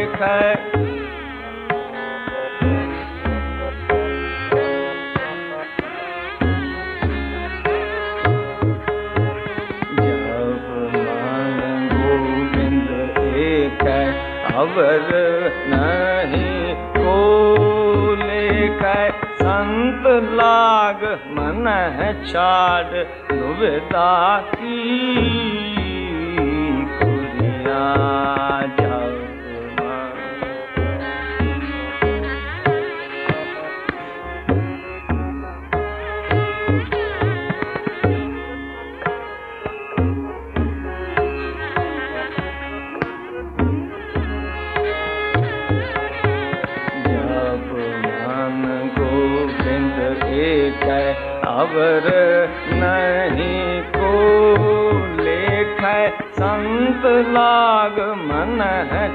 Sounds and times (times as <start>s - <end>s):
Sitar: 0.0s - 59.1s.